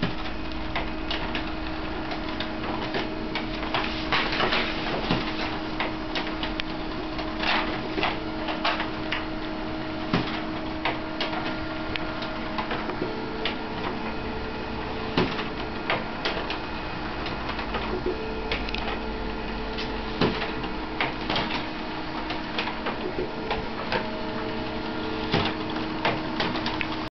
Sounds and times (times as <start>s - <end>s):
Printer: 0.0s - 27.1s.